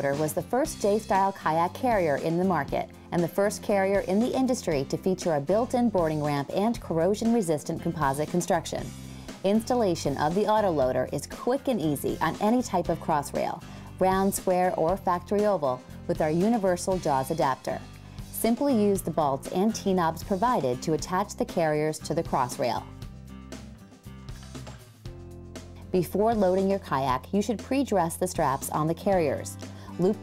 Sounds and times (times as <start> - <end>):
Speech: 0.0 - 17.8, 18.4 - 22.9, 25.9 - 30.2
Music: 0.0 - 30.2.